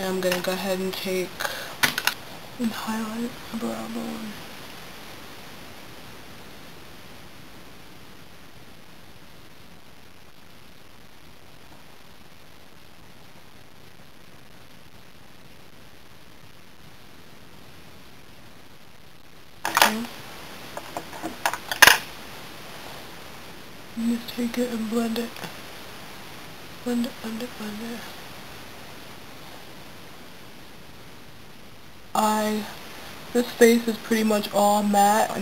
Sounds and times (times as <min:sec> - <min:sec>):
Speech: 0:00.0 - 0:01.8, 0:02.6 - 0:04.4, 0:19.7 - 0:20.1, 0:24.0 - 0:25.5, 0:26.8 - 0:28.1, 0:32.2 - 0:32.8, 0:33.4 - 0:35.4
Inside, small room: 0:00.0 - 0:35.4.